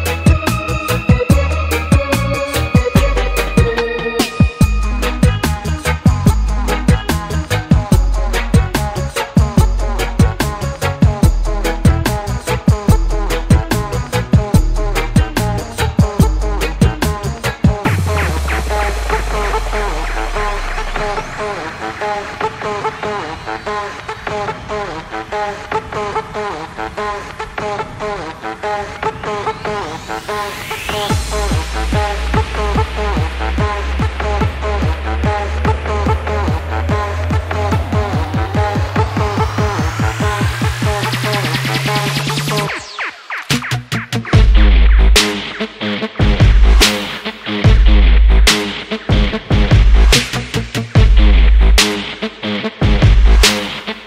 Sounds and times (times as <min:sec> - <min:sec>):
Electronic dance music: 0:00.0 - 0:54.0.